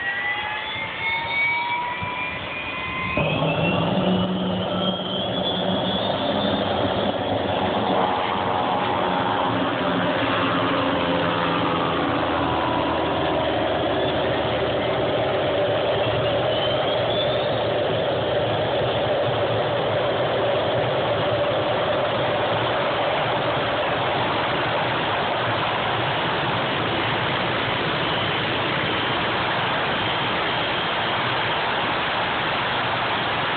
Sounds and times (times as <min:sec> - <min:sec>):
Engine: 0:00.0 - 0:33.5
Vehicle: 0:00.0 - 0:33.5.